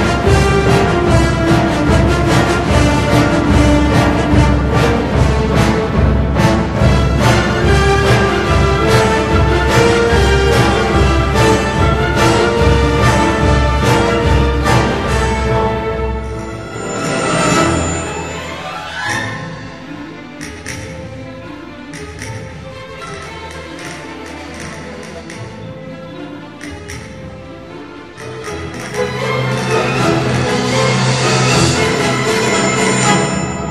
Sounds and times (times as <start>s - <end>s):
Music: 0.0s - 33.7s.